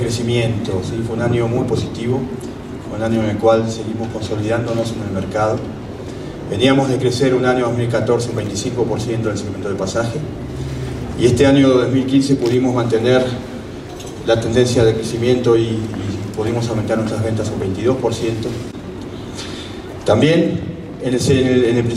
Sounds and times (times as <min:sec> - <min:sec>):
Speech: 0:00.0 - 0:05.7, 0:06.5 - 0:10.3, 0:11.2 - 0:13.4, 0:14.0 - 0:18.7, 0:20.0 - 0:21.9.